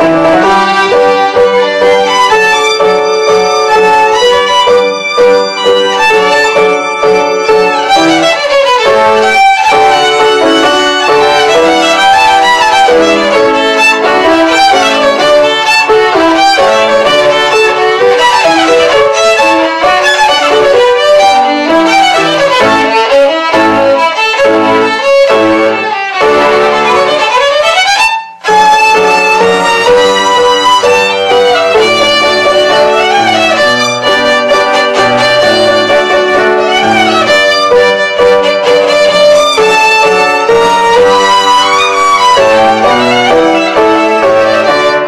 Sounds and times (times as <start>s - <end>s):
Violin, fiddle: 0.0s - 45.0s.